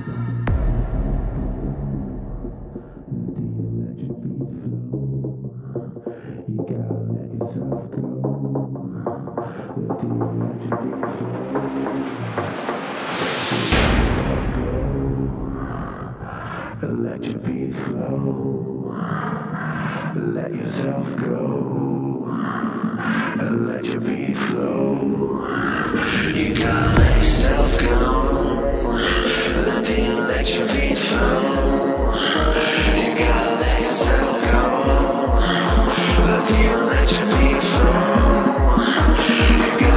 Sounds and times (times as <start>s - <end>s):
Music: 0.0s - 39.9s.